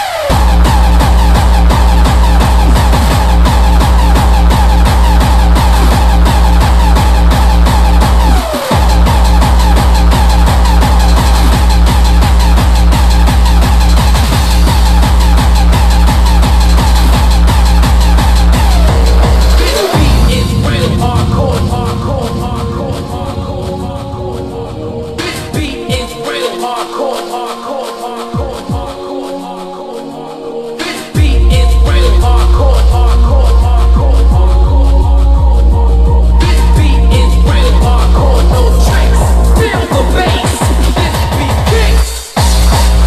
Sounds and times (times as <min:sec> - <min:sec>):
Music: 0:00.0 - 0:43.0.